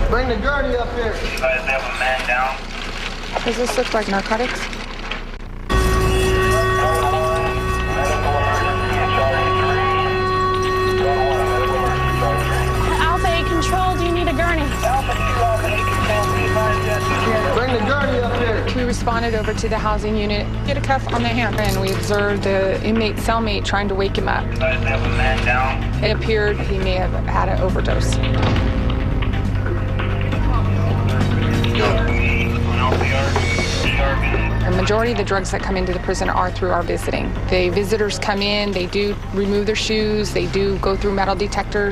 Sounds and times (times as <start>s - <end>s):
Music: 5.7s - 41.9s.